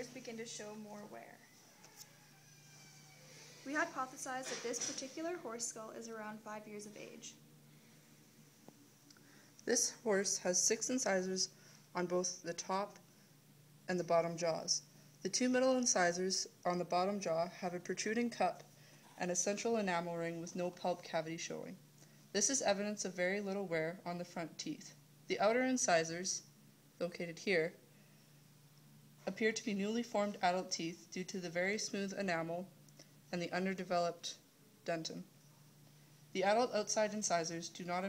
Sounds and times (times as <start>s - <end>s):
Speech: 0.0s - 1.5s, 3.6s - 7.4s, 9.7s - 13.0s, 13.9s - 21.8s, 22.4s - 27.8s, 29.3s - 32.7s, 33.3s - 35.3s, 36.4s - 38.0s.